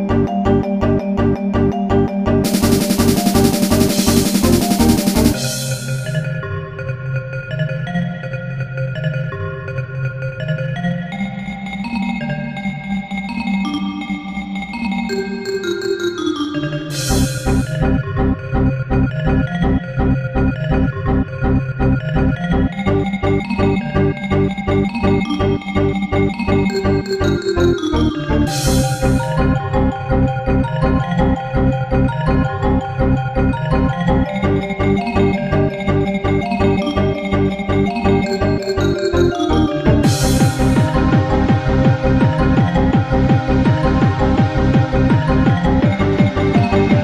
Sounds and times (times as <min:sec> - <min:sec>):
Techno: 0:02.4 - 0:06.4, 0:16.9 - 0:20.5, 0:21.1 - 0:33.2, 0:34.1 - 0:47.0.